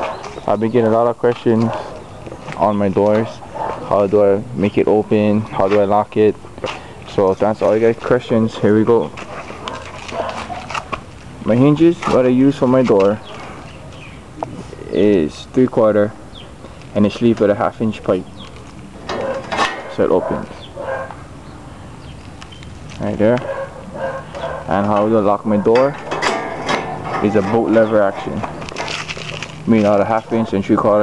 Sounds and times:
Speech: 0.5s - 1.9s, 2.6s - 6.4s, 7.1s - 9.1s, 11.4s - 13.2s, 14.7s - 16.2s, 17.0s - 18.3s, 19.9s - 20.6s, 23.0s - 23.5s, 24.7s - 26.0s, 27.2s - 28.5s, 29.7s - 31.0s
Bow-wow: 9.6s - 10.8s, 20.2s - 21.2s, 23.4s - 24.8s.

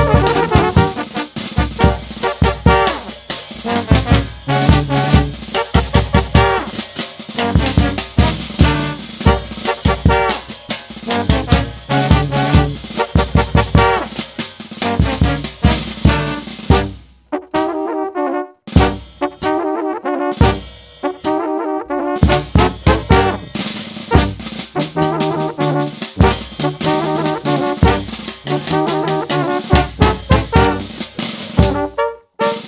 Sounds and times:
Brass instrument: 0.0s - 32.6s.

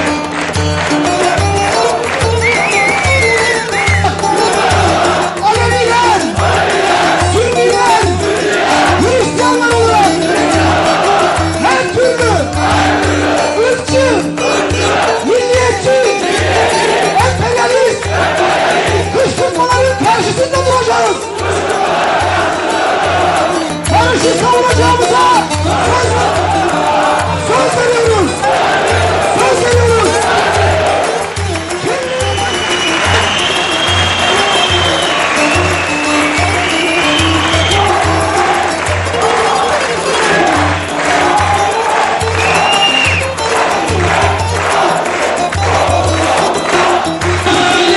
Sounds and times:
Music: 0.0s - 47.9s
Speech: 5.4s - 6.3s, 9.0s - 10.2s, 11.6s - 12.5s, 15.2s - 16.3s, 17.2s - 18.0s, 19.1s - 21.3s, 23.9s - 28.4s, 29.4s - 30.2s.

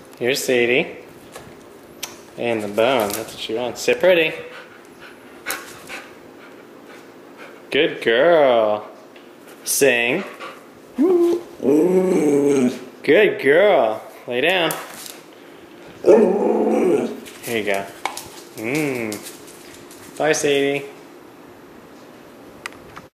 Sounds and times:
Speech: 0.2s - 1.0s, 2.4s - 4.5s, 7.7s - 8.9s, 9.6s - 10.4s, 11.0s - 14.8s, 17.4s - 18.0s, 20.2s - 21.0s
Growling: 11.6s - 12.8s, 16.0s - 17.2s.

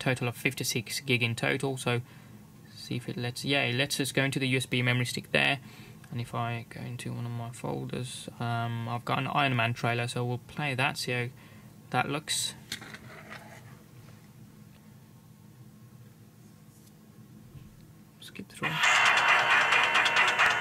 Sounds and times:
Speech: 0.0s - 2.0s, 2.7s - 11.3s, 11.9s - 12.6s, 18.2s - 18.8s.

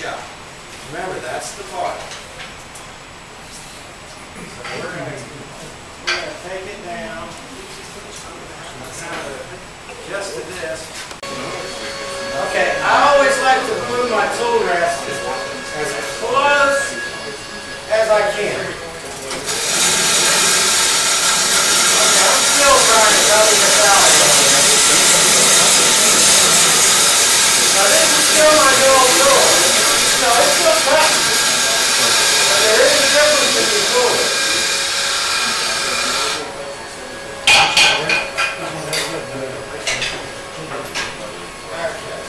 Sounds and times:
Speech: 0.0s - 2.2s, 4.4s - 19.5s, 21.6s - 34.8s, 35.4s - 42.2s.

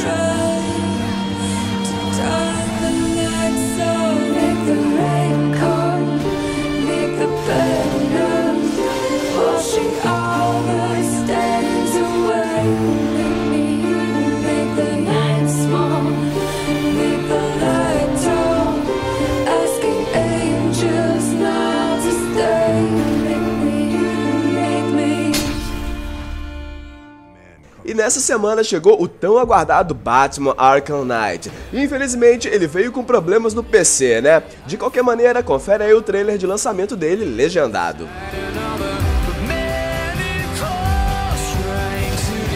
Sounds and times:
Music: 0.0s - 28.4s, 29.1s - 42.5s.

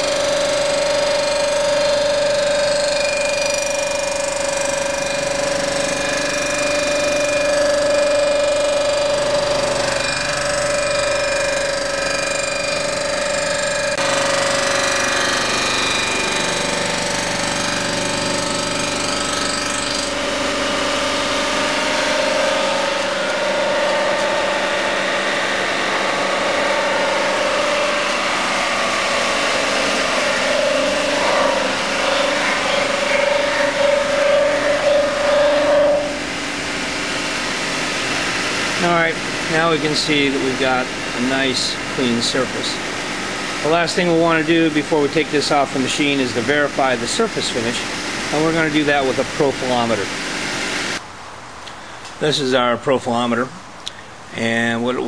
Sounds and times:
Power tool: 0.0s - 51.0s.

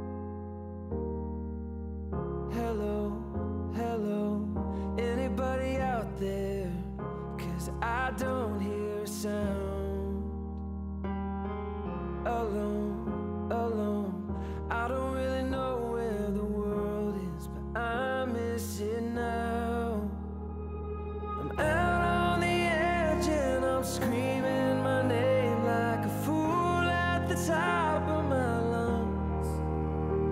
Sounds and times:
Music: 0.0s - 30.3s.

